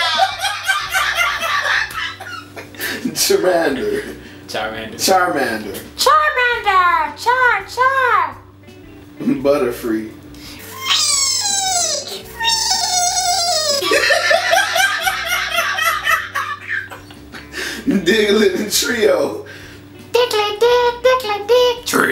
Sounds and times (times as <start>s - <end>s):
Laughter: 0.0s - 3.2s, 13.7s - 17.5s
Music: 0.0s - 22.1s.